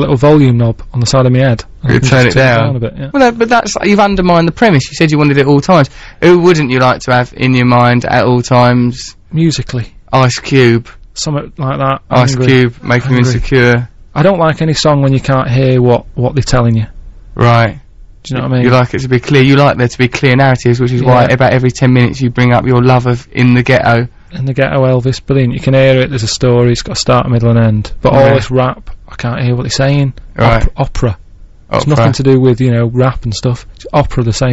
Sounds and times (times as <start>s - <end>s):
Speech: 0.0s - 34.5s.